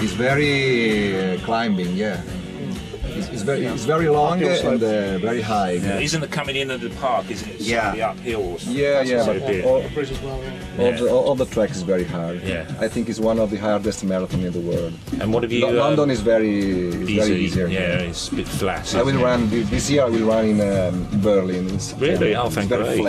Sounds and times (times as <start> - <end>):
Speech: 0.0 - 2.3, 3.1 - 23.0
Music: 0.0 - 23.0.